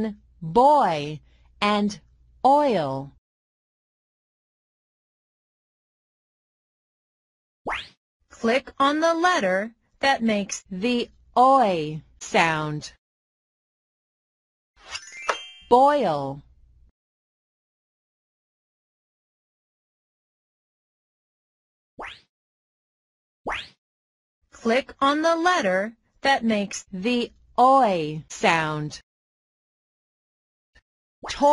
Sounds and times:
Speech: 0:00.0 - 0:03.2, 0:08.4 - 0:13.0, 0:15.7 - 0:16.5, 0:24.6 - 0:29.0.

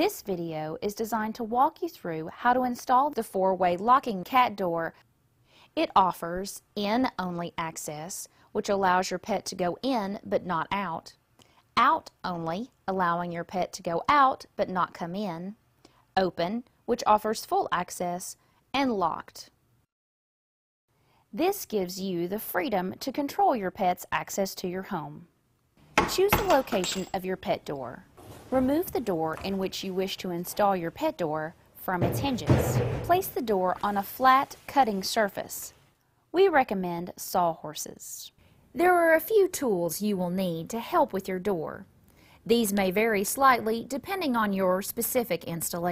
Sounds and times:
Speech: 0:00.0 - 0:05.0, 0:05.8 - 0:11.2, 0:11.8 - 0:15.6, 0:16.2 - 0:19.6, 0:21.4 - 0:25.3, 0:26.1 - 0:35.8, 0:36.4 - 0:41.9, 0:42.5 - 0:45.9.

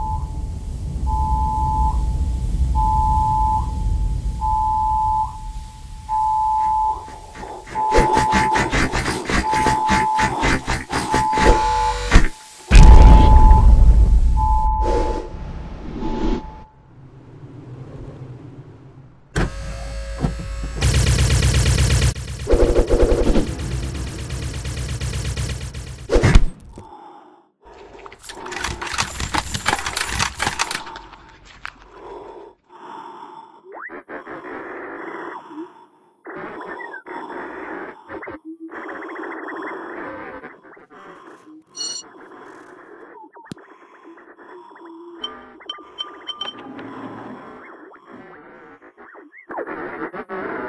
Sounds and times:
Sound effect: 0:00.0 - 0:26.9, 0:45.2 - 0:50.6.

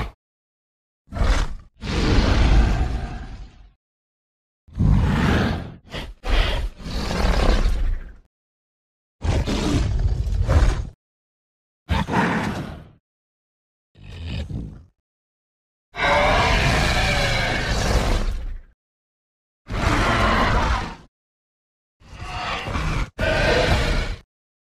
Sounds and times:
Sound effect: 0:09.2 - 0:11.0, 0:11.9 - 0:13.0, 0:22.0 - 0:24.2.

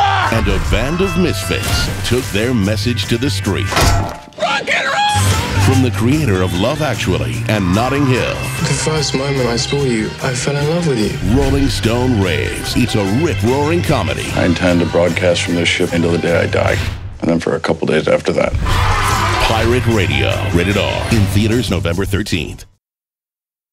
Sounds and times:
Music: 0:00.0 - 0:17.5, 0:18.4 - 0:22.8
Speech: 0:00.3 - 0:03.7, 0:04.4 - 0:18.6, 0:19.4 - 0:22.8.

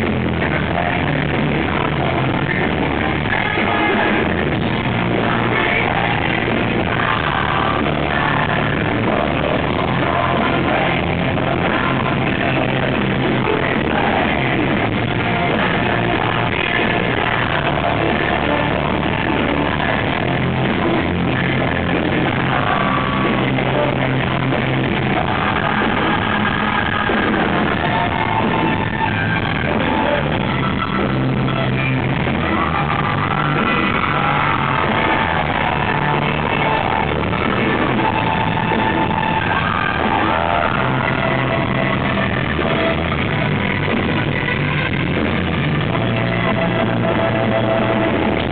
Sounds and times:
Music: 0:00.0 - 0:48.5.

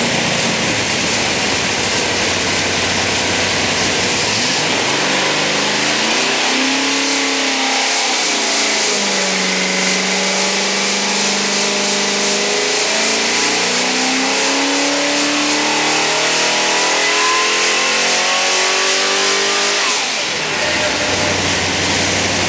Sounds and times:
Medium engine (mid frequency): 0:00.0 - 0:22.4
Accelerating, revving, vroom: 0:03.7 - 0:22.4.

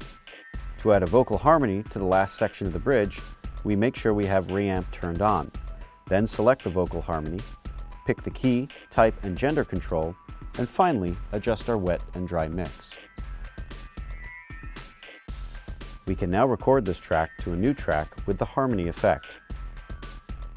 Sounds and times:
Music: 0:00.0 - 0:20.5
Speech: 0:00.8 - 0:05.5, 0:06.1 - 0:07.4, 0:08.1 - 0:13.0, 0:16.1 - 0:19.4.

